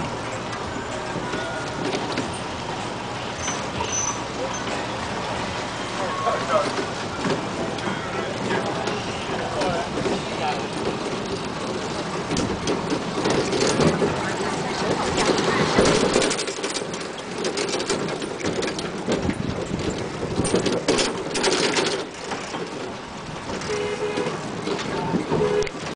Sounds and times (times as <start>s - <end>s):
Vehicle: 0.0s - 25.9s.